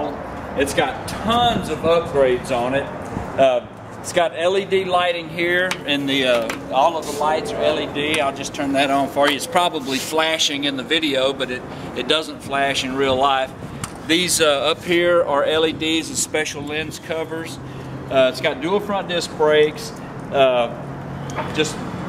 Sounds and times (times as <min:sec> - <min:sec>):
Speech: 0:00.0 - 0:13.5, 0:14.1 - 0:20.8, 0:21.4 - 0:21.8.